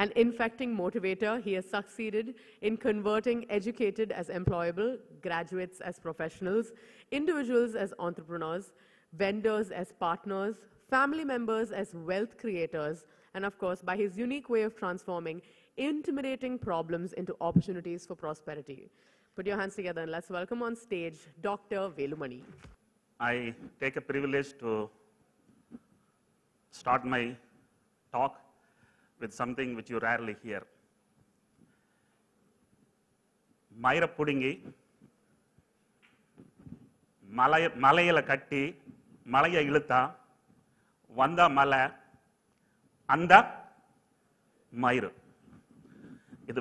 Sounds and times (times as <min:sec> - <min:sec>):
Female speech, woman speaking: 0:00.0 - 0:18.8, 0:19.4 - 0:22.5
Male speech, man speaking: 0:23.2 - 0:25.0, 0:26.8 - 0:27.4, 0:28.2 - 0:28.4, 0:29.2 - 0:30.7, 0:33.8 - 0:34.7, 0:37.3 - 0:40.2, 0:41.2 - 0:42.0, 0:43.1 - 0:43.6, 0:44.8 - 0:45.2.